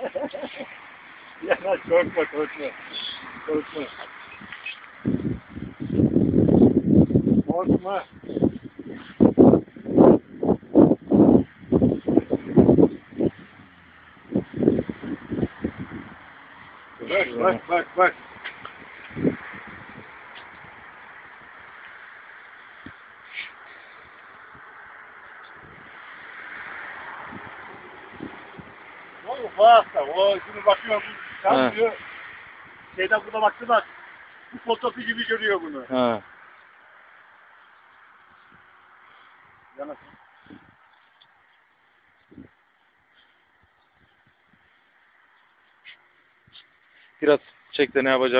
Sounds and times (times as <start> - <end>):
Speech: 7.5 - 8.1, 17.0 - 18.2, 29.3 - 32.0, 34.6 - 36.2, 39.8 - 40.0, 47.2 - 48.3.